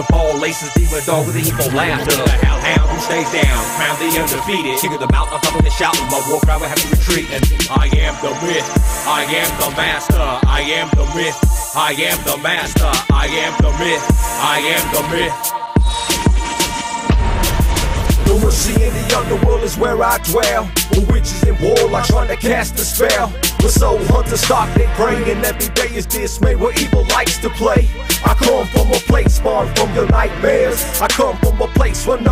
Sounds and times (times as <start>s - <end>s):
Music: 0.0s - 32.3s.